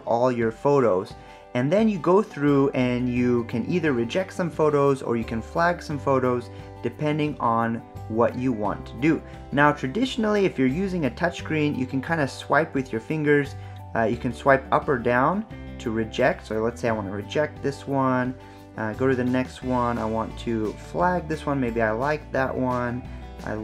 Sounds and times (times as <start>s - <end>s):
Music: 0.0s - 23.6s
Speech: 0.0s - 23.6s.